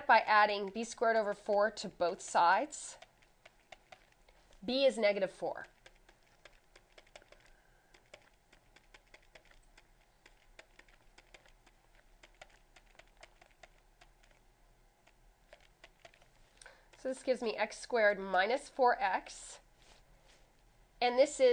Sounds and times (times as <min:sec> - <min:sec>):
Speech: 0:00.0 - 0:03.0, 0:04.6 - 0:05.7, 0:17.0 - 0:19.6, 0:21.0 - 0:21.5
Inside, small room: 0:00.0 - 0:21.5.